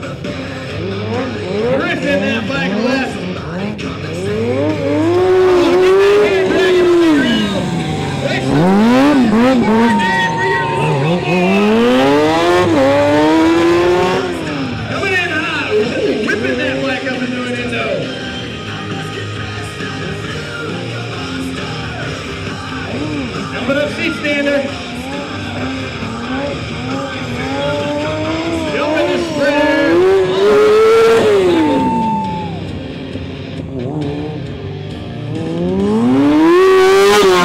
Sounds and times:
Motorcycle: 0:00.0 - 0:37.4
Music: 0:00.0 - 0:37.4
Race car, auto racing: 0:00.0 - 0:37.4
Speech: 0:01.6 - 0:03.2, 0:05.6 - 0:07.6, 0:14.9 - 0:18.2, 0:22.9 - 0:25.5, 0:26.2 - 0:30.6.

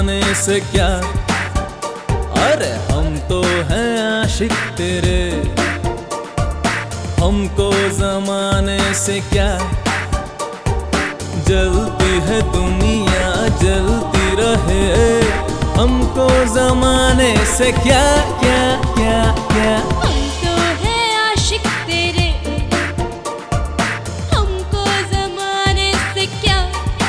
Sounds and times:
Music of Bollywood: 0:00.0 - 0:27.0.

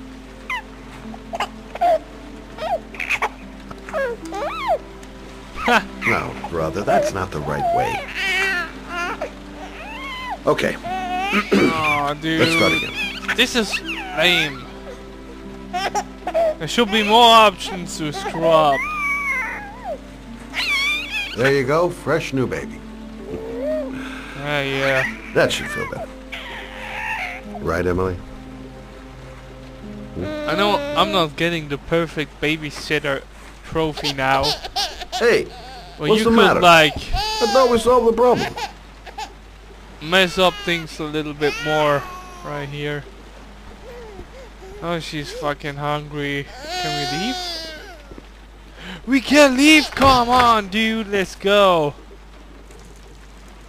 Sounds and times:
Music: 0:00.0 - 0:53.6
Rain on surface: 0:00.0 - 0:53.6
Speech: 0:06.0 - 0:08.0, 0:10.5 - 0:10.8, 0:11.4 - 0:14.6, 0:16.6 - 0:18.8, 0:21.4 - 0:22.8, 0:24.4 - 0:26.1, 0:27.6 - 0:28.2, 0:30.2 - 0:34.6, 0:35.2 - 0:38.6, 0:40.0 - 0:43.0, 0:44.8 - 0:47.4, 0:49.1 - 0:52.0.

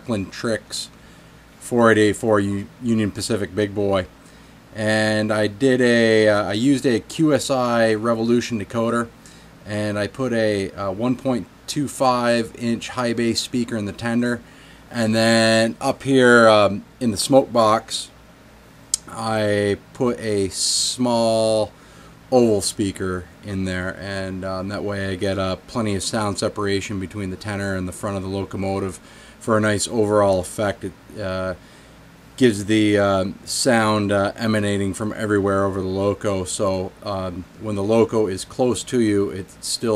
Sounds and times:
Speech: 0:00.0 - 0:01.0, 0:01.6 - 0:04.1, 0:04.7 - 0:18.2, 0:19.0 - 0:21.7, 0:22.3 - 0:31.6, 0:32.4 - 0:39.9.

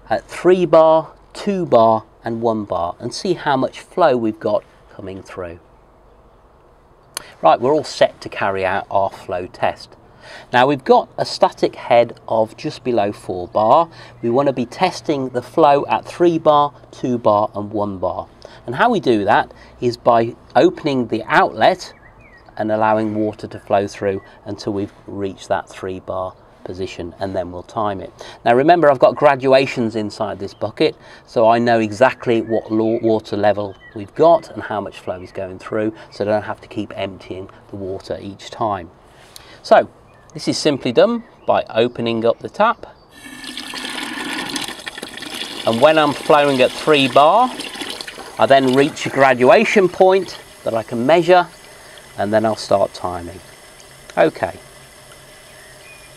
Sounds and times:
Speech: 0:00.0 - 0:05.6, 0:07.2 - 0:22.0, 0:22.6 - 0:39.0, 0:39.6 - 0:43.0, 0:45.6 - 0:47.6, 0:48.4 - 0:51.6, 0:52.2 - 0:53.5, 0:54.1 - 0:54.6
Fill (with liquid): 0:43.2 - 0:56.1.

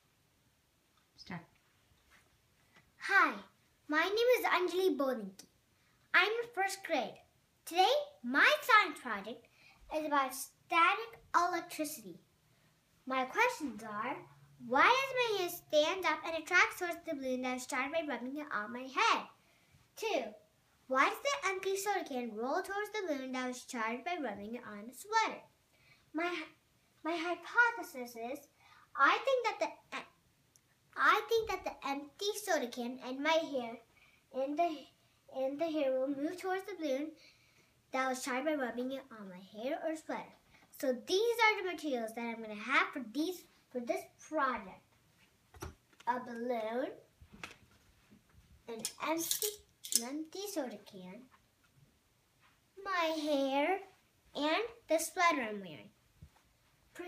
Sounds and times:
Speech: 0:01.2 - 0:01.5, 0:03.0 - 0:05.5, 0:06.1 - 0:12.2, 0:13.1 - 0:19.4, 0:20.0 - 0:25.5, 0:26.2 - 0:30.1, 0:31.0 - 0:37.2, 0:37.9 - 0:44.9, 0:46.1 - 0:47.1, 0:48.7 - 0:51.3, 0:52.8 - 0:56.0.

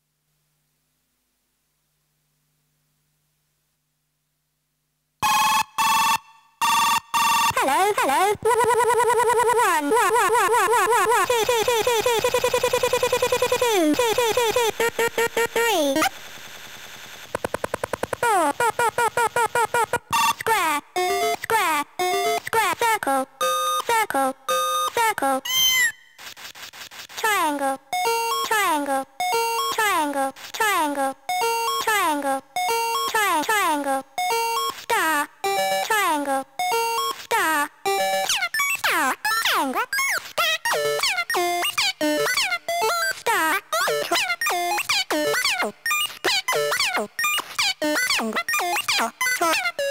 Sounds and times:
Speech: 0:07.6 - 0:14.8, 0:15.6 - 0:16.1, 0:20.4 - 0:25.5, 0:27.2 - 0:27.8, 0:28.4 - 0:29.1, 0:29.7 - 0:31.2, 0:31.8 - 0:32.4, 0:33.1 - 0:34.1, 0:34.9 - 0:36.5, 0:37.3 - 0:37.7, 0:38.4 - 0:49.9
Music: 0:20.2 - 0:22.6, 0:23.3 - 0:26.2, 0:27.8 - 0:29.9, 0:31.2 - 0:33.2, 0:34.1 - 0:39.5, 0:40.6 - 0:43.2, 0:43.9 - 0:49.9.

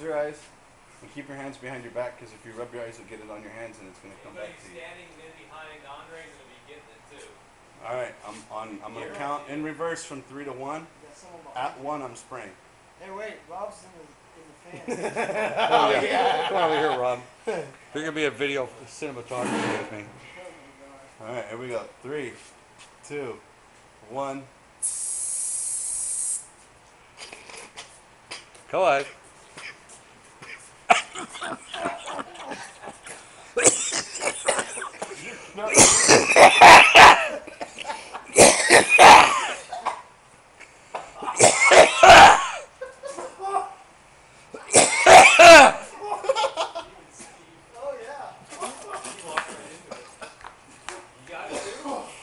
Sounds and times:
Spray: 0:24.8 - 0:26.5.

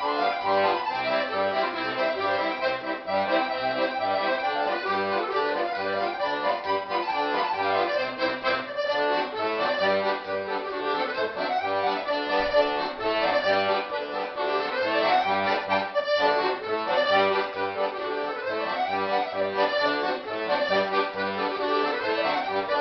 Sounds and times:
Musical instrument: 0:00.0 - 0:22.8.

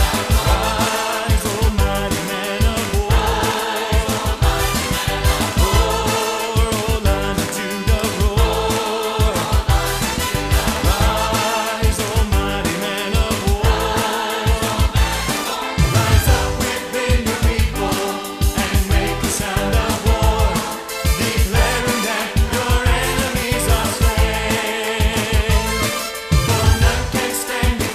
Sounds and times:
Music: 0:00.0 - 0:27.9.

